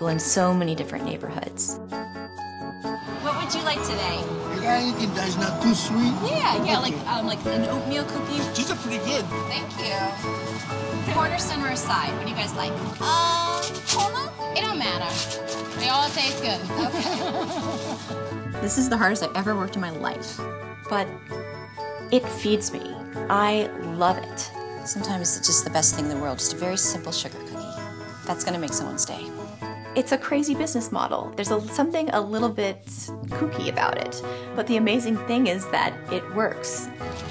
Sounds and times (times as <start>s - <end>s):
Music: 0.0s - 37.3s.